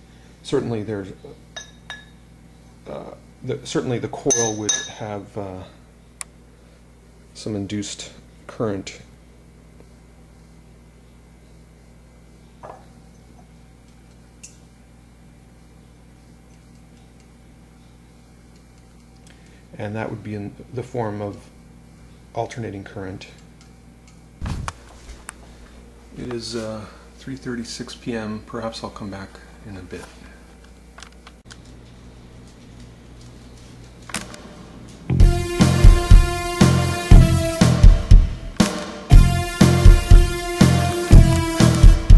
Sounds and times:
Speech: 0.4 - 1.4, 2.8 - 5.8, 7.4 - 9.1, 19.8 - 21.5, 22.3 - 23.4, 26.2 - 30.3
Music: 35.1 - 42.1.

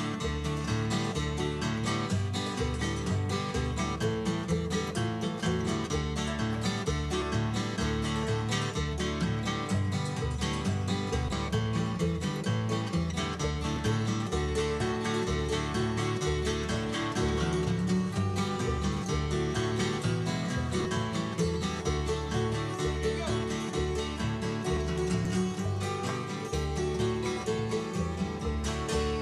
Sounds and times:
Guitar: 0.0 - 29.2.

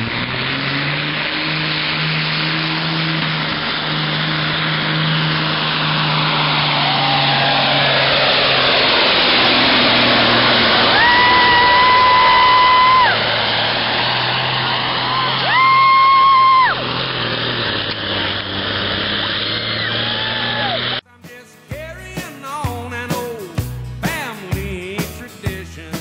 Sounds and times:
Truck: 0.0 - 26.0
Music: 21.0 - 26.0.

